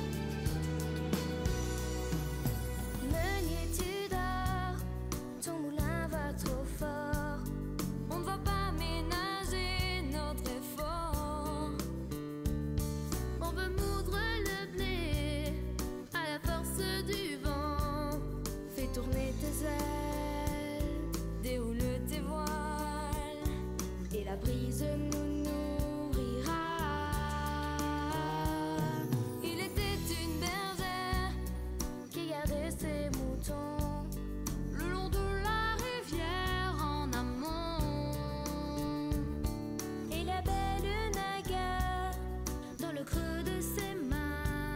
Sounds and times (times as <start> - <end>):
Music: 0.0 - 44.7.